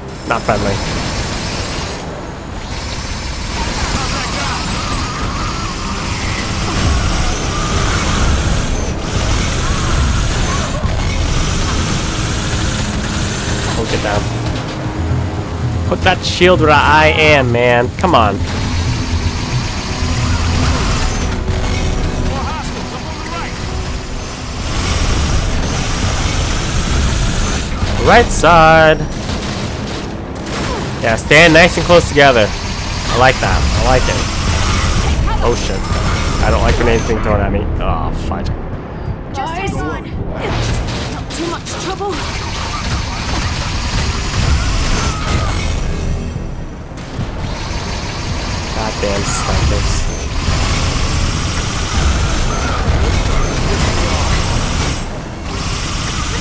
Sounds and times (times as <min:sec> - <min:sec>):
Music: 0:00.0 - 0:56.4.